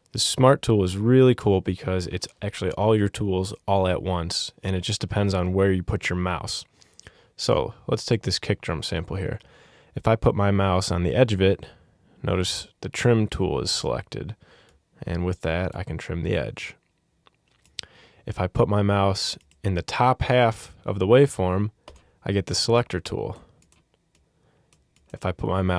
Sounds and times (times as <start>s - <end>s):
Speech: 0.1s - 6.7s, 7.4s - 9.4s, 10.0s - 14.4s, 15.0s - 16.8s, 18.2s - 23.5s, 25.1s - 25.7s.